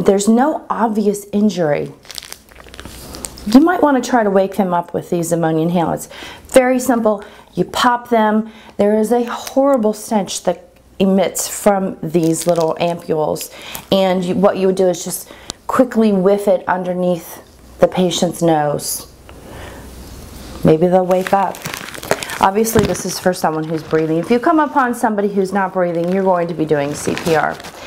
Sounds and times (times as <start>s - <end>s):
Speech: 0.0s - 2.0s, 3.5s - 19.1s, 20.6s - 21.6s, 22.4s - 27.7s
Inside, small room: 0.0s - 27.8s
Crumpling, crinkling: 1.8s - 3.6s, 12.2s - 13.8s, 20.9s - 27.8s.